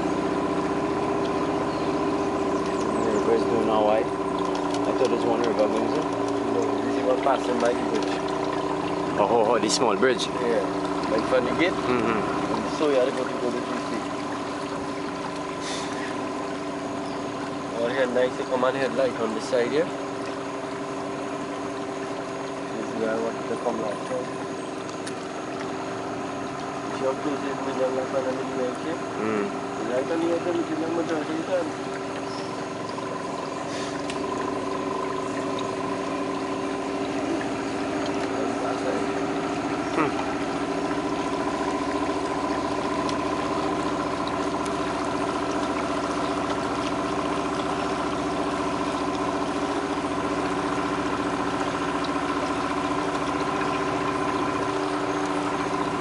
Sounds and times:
Motorboat, speedboat: 0.0s - 56.0s
Speech: 3.0s - 4.1s, 4.9s - 8.1s, 9.2s - 14.0s, 17.8s - 19.9s, 22.8s - 24.3s, 27.0s - 31.8s, 38.4s - 39.1s.

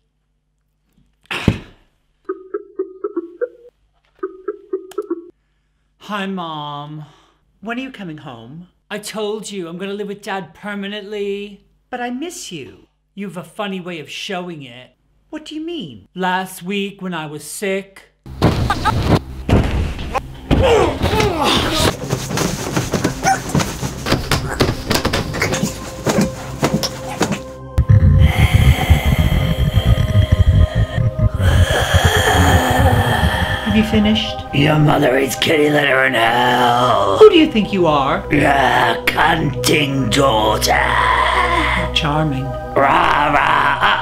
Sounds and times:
Speech: 6.0s - 18.2s, 33.1s - 43.4s
Music: 20.2s - 44.0s.

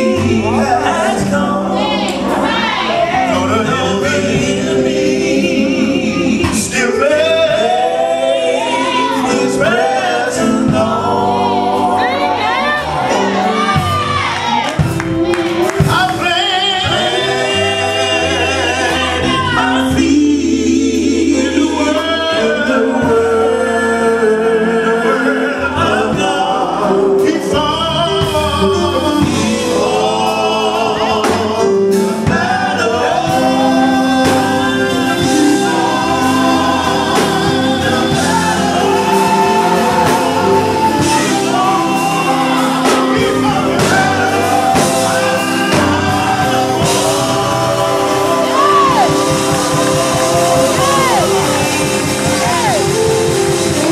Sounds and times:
Choir: 0.0s - 53.9s
Gospel music: 0.0s - 53.9s.

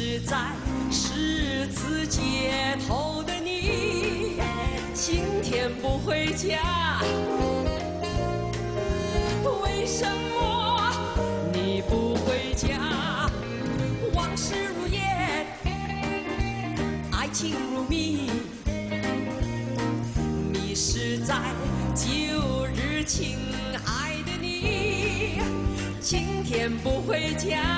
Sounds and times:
Music: 0.0s - 27.7s.

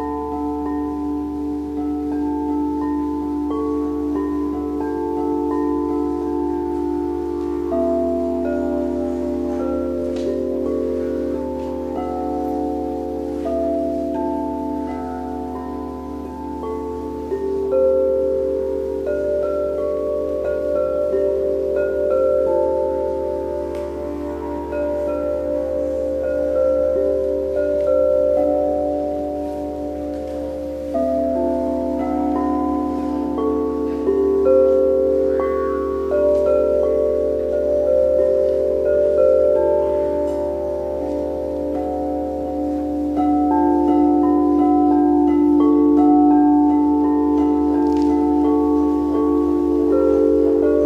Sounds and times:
Singing bowl: 0.0s - 50.8s.

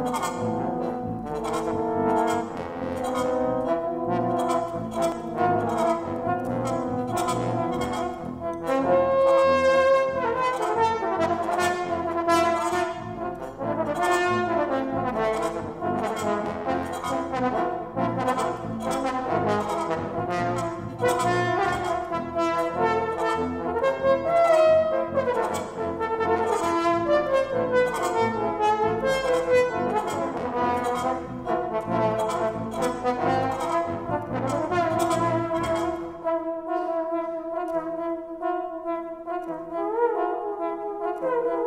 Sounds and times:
Trombone: 0.0s - 41.6s.

